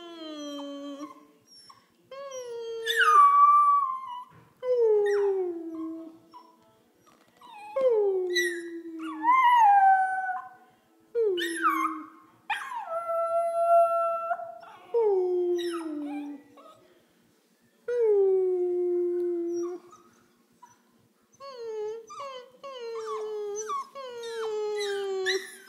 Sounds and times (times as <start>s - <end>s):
Howl: 7.4s - 10.6s, 11.2s - 16.8s.